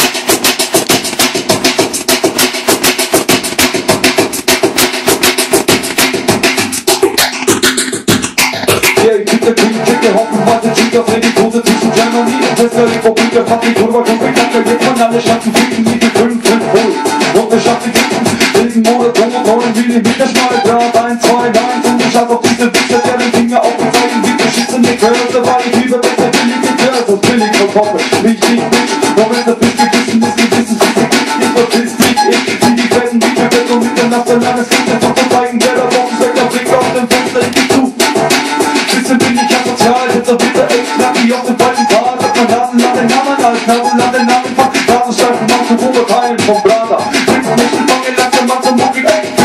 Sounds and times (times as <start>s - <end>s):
Scratching (performance technique): 0.0s - 49.4s.